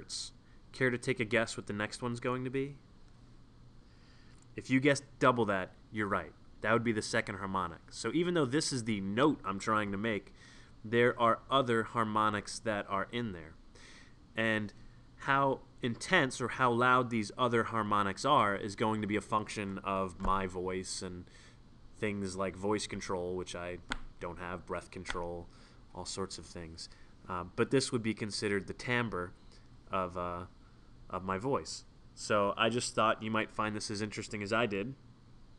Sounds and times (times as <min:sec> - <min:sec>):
Speech: 0:00.0 - 0:02.8, 0:04.6 - 0:13.6, 0:14.4 - 0:21.3, 0:22.0 - 0:30.5, 0:31.1 - 0:35.0.